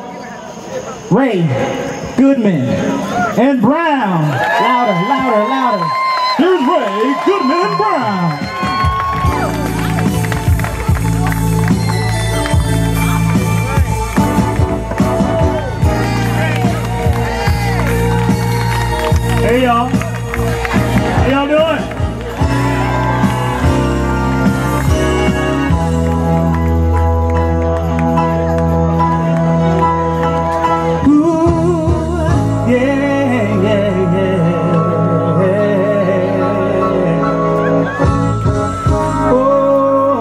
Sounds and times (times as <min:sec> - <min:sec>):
Music: 0:04.6 - 0:40.2.